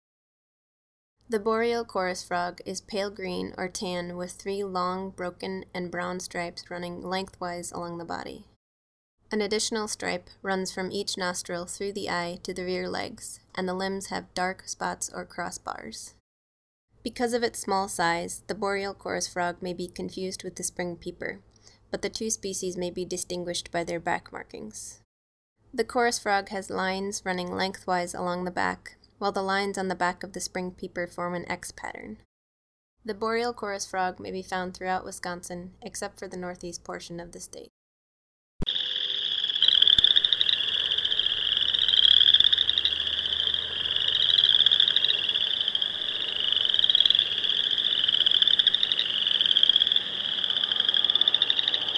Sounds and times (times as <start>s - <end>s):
Speech: 1.3s - 8.6s, 9.3s - 16.2s, 17.0s - 25.0s, 25.7s - 32.2s, 33.0s - 37.7s.